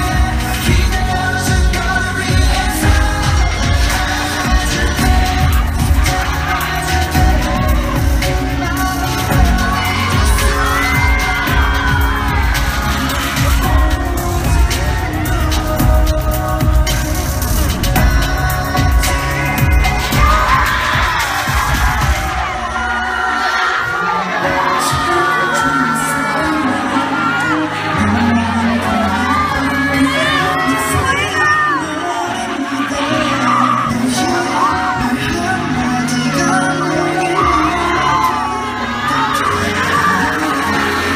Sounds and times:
Music: 0.0s - 41.1s.

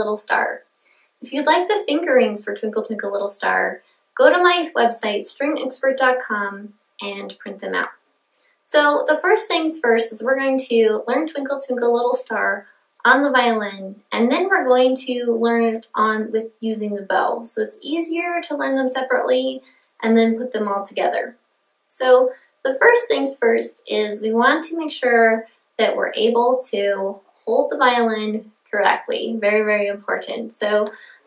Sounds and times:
Speech: 0.0s - 0.6s, 1.2s - 8.0s, 8.7s - 31.1s.

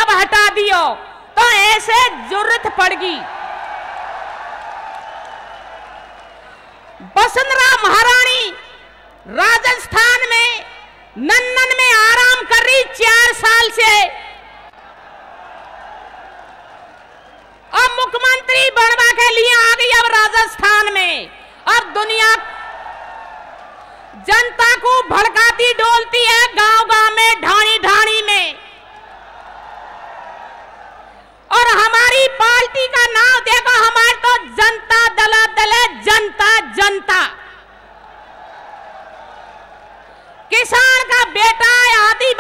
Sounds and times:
Female speech, woman speaking: 0.0s - 3.2s, 7.0s - 8.7s, 9.3s - 14.2s, 17.8s - 22.4s, 24.2s - 28.6s, 31.5s - 37.4s, 40.5s - 42.4s
Narration, monologue: 0.0s - 3.3s, 7.0s - 14.4s, 17.7s - 22.6s, 24.1s - 28.8s, 31.5s - 37.7s, 40.5s - 42.4s.

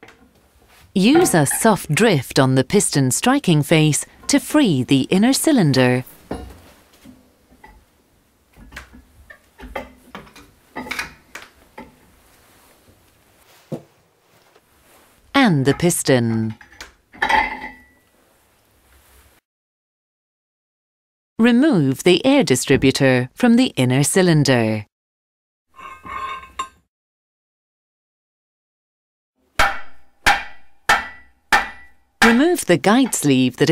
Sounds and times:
Speech: 1.0s - 6.1s, 15.4s - 16.6s, 21.4s - 24.9s, 32.2s - 33.7s.

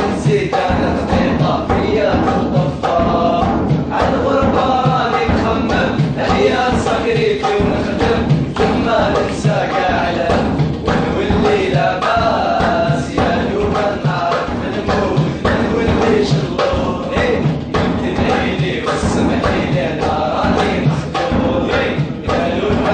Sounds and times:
Mantra: 0.0s - 22.9s.

